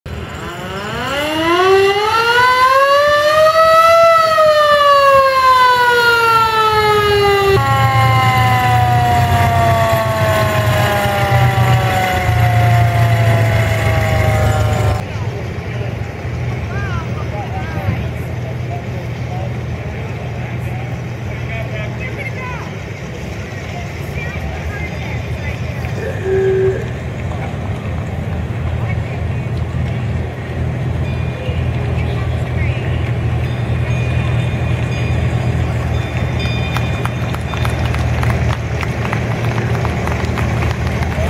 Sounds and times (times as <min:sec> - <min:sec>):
Civil defense siren: 0:00.1 - 0:15.0, 0:26.0 - 0:26.9.